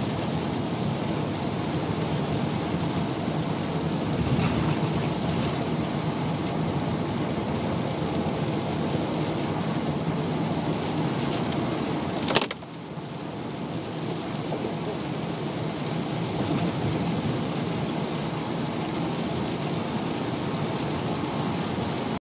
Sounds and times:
Rain on surface: 0.0 - 22.2.

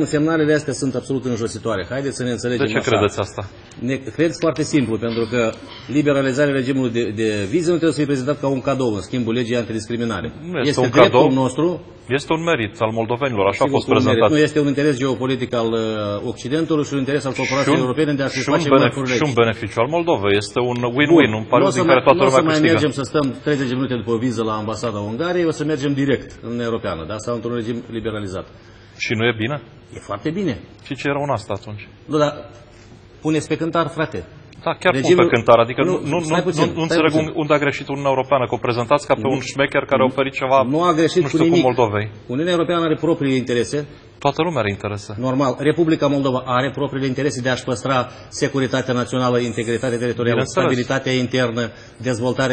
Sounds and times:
Speech: 0.0 - 32.5, 33.3 - 52.5.

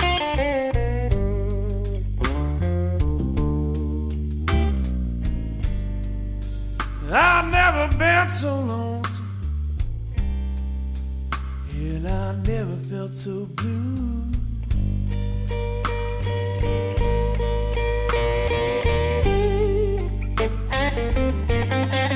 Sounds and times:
Steel guitar, slide guitar: 0.0 - 8.5, 14.9 - 22.1.

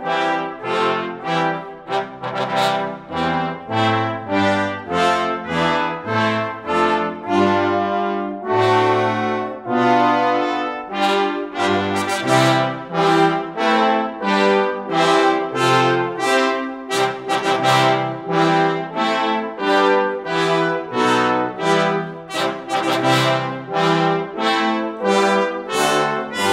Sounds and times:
Trombone: 0.0 - 26.5.

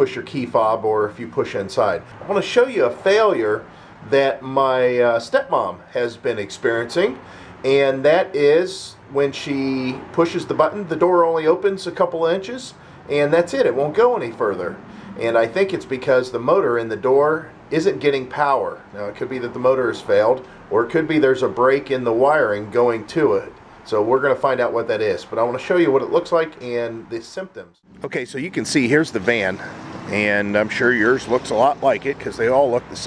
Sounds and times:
Speech: 0.0 - 33.0.

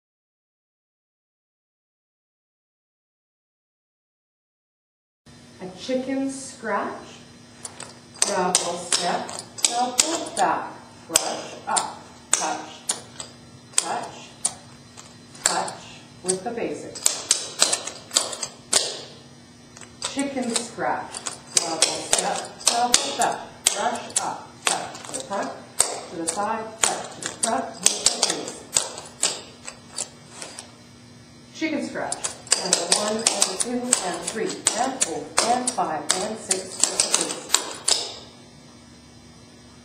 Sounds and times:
Speech: 5.6 - 7.3, 8.2 - 13.0, 13.8 - 14.5, 15.4 - 17.0, 20.0 - 28.7, 31.6 - 37.5.

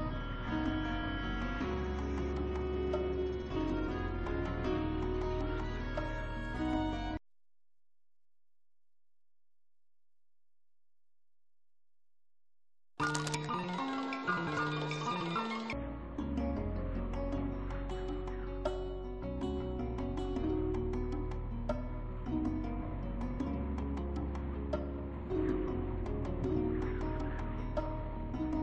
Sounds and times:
Music: 0.0 - 7.2, 13.0 - 28.6.

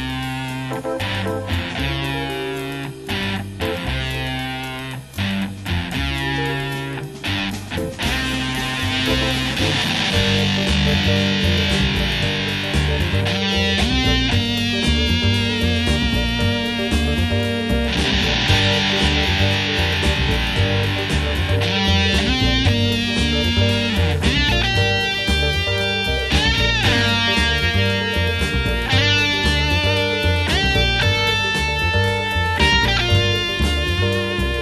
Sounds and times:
Music: 0.0 - 34.6.

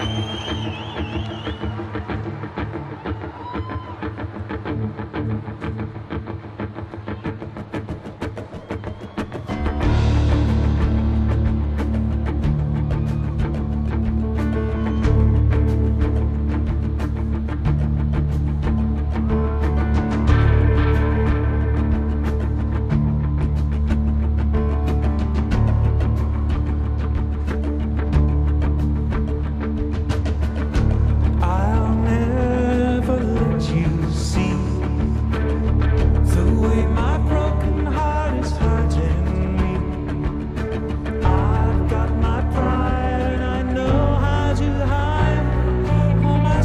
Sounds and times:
Music: 0.0 - 46.6.

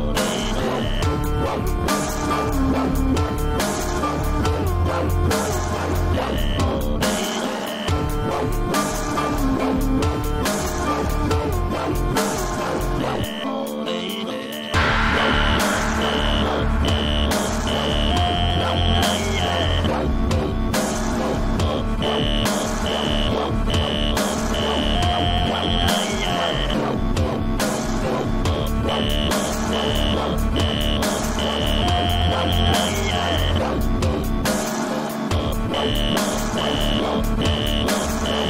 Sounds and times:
Dubstep: 0.0 - 38.4.

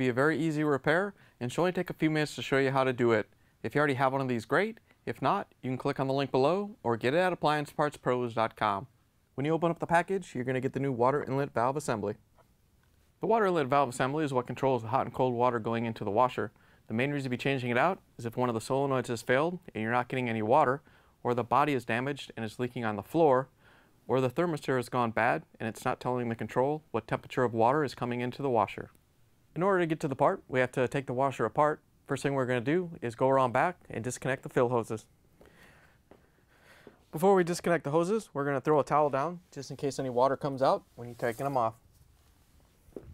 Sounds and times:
Speech: 0.0 - 12.2, 13.2 - 23.5, 24.1 - 35.1, 37.1 - 41.8.

